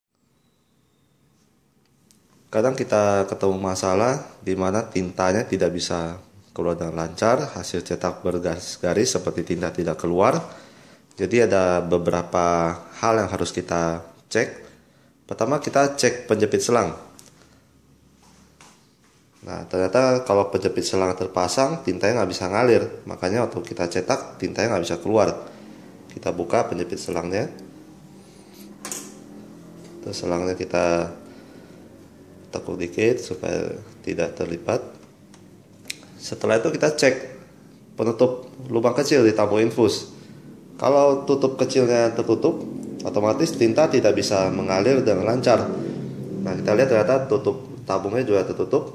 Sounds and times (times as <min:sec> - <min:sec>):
Speech: 0:02.5 - 0:10.5, 0:11.2 - 0:14.7, 0:15.3 - 0:17.1, 0:19.4 - 0:25.5, 0:26.1 - 0:27.6, 0:30.0 - 0:31.2, 0:32.5 - 0:35.0, 0:36.2 - 0:37.4, 0:38.0 - 0:40.2, 0:40.8 - 0:45.8, 0:46.4 - 0:48.9.